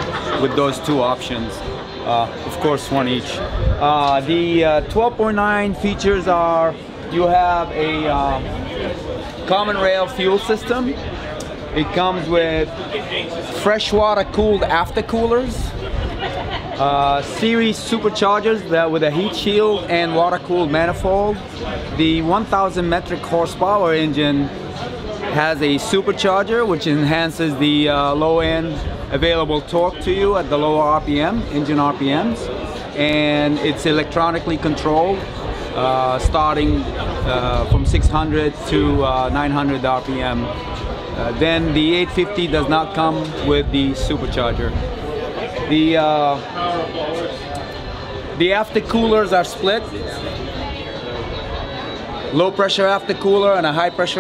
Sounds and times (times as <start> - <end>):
Speech: 0.0 - 15.8, 16.7 - 54.2.